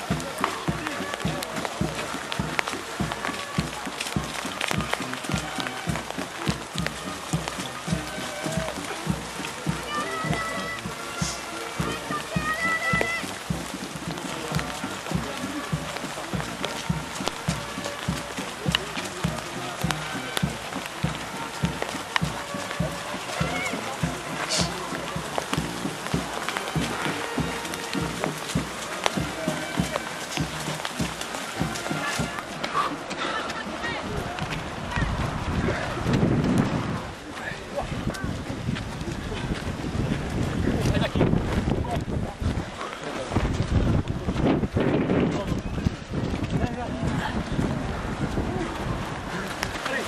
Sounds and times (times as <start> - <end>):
Music: 0.0 - 35.0
Speech: 0.0 - 36.2, 37.0 - 50.0
Outside, rural or natural: 0.0 - 50.0.